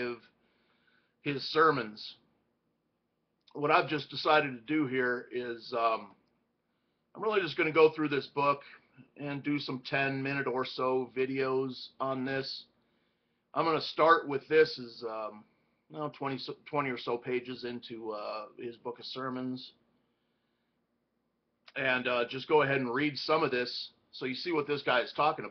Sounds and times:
Speech: 0:00.0 - 0:00.3, 0:01.2 - 0:02.2, 0:03.5 - 0:06.2, 0:07.2 - 0:12.7, 0:13.5 - 0:19.8, 0:21.7 - 0:25.5.

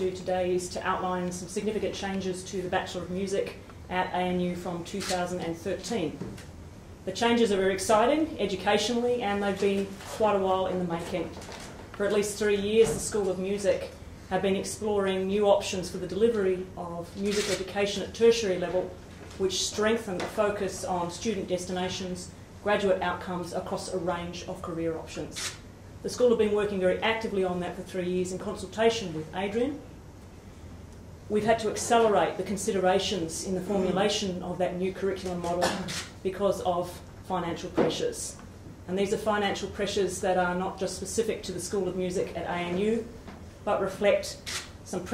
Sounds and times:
Speech: 0:00.0 - 0:06.3, 0:07.1 - 0:29.9, 0:31.3 - 0:45.1.

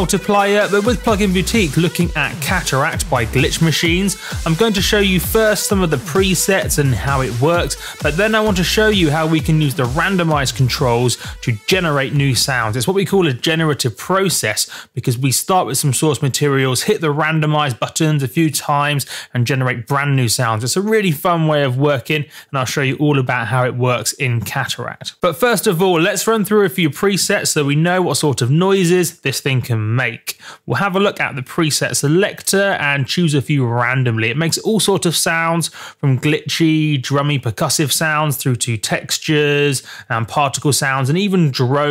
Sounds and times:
Speech: 0:00.0 - 0:41.9.

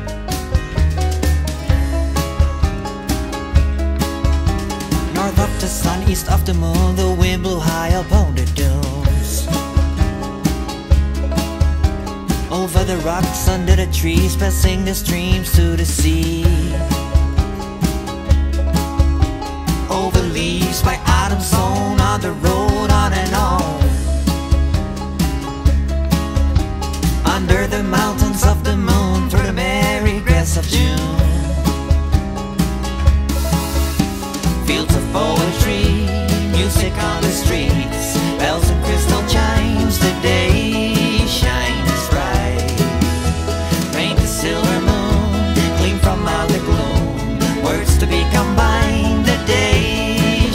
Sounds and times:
Background music: 0:00.0 - 0:50.5.

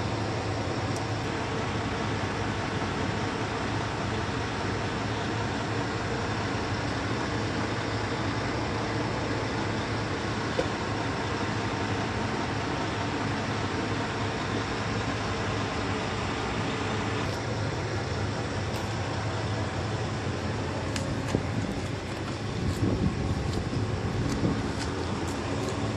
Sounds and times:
Vehicle: 0:00.0 - 0:25.9.

